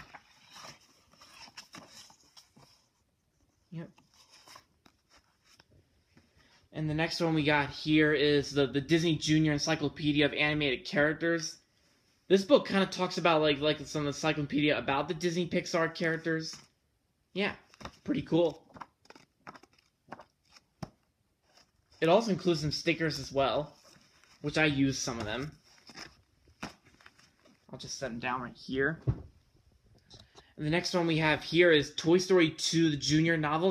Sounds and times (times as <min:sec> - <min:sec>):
Inside, small room: 0:00.0 - 0:33.7
Speech: 0:03.7 - 0:04.0, 0:06.7 - 0:11.6, 0:12.3 - 0:16.7, 0:17.3 - 0:18.7, 0:22.0 - 0:23.8, 0:24.4 - 0:25.6, 0:27.7 - 0:29.2, 0:30.6 - 0:33.7.